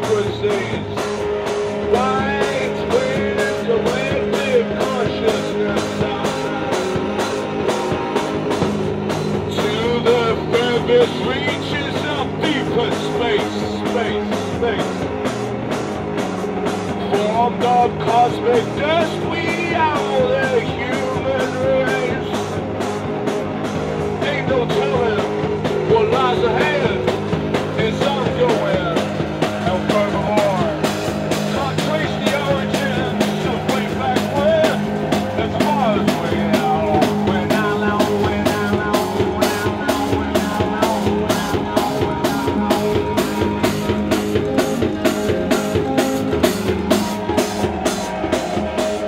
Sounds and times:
Music: 0.0s - 49.0s
Singing: 1.9s - 7.8s, 9.3s - 15.0s, 24.2s - 44.4s.

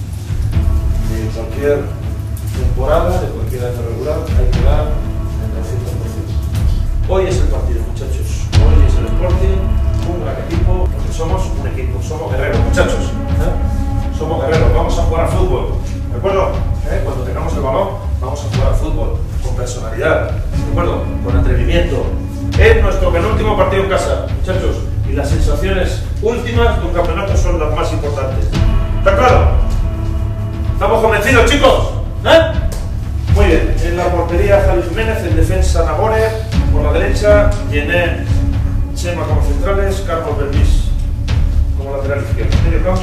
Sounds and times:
Speech: 1.0s - 2.0s, 2.6s - 29.7s, 30.8s - 32.7s, 33.3s - 41.0s, 41.8s - 43.0s.

